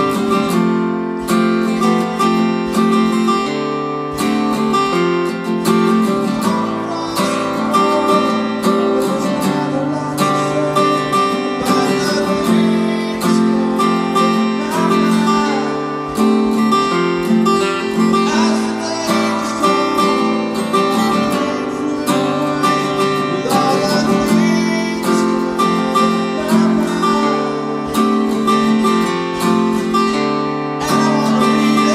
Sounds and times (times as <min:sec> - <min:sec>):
Acoustic guitar: 0:00.0 - 0:31.9
Strum: 0:00.0 - 0:31.9.